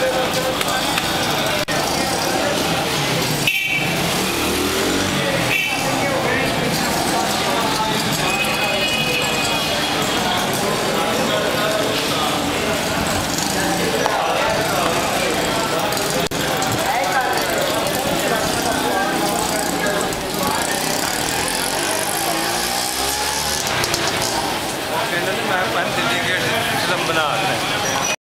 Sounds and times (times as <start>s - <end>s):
Speech: 0.0s - 3.5s, 4.7s - 28.2s.